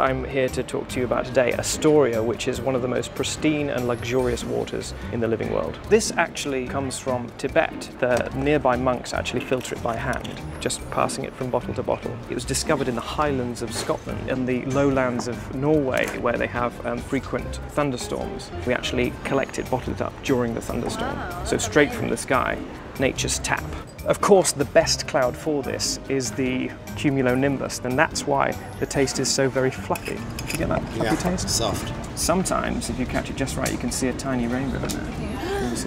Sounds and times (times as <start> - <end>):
Music: 0.0 - 35.8
Speech: 0.0 - 35.8.